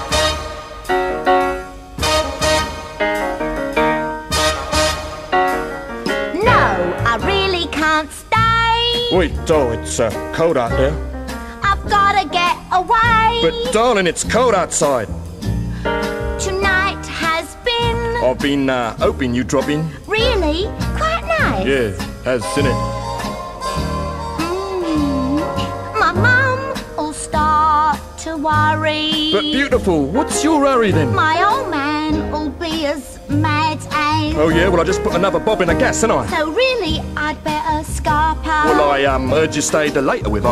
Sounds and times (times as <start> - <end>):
Music: 0.0 - 40.5
Speech: 6.4 - 7.9, 9.0 - 11.0, 11.7 - 15.1, 18.2 - 22.8, 29.2 - 31.8, 34.2 - 37.0, 38.5 - 40.5.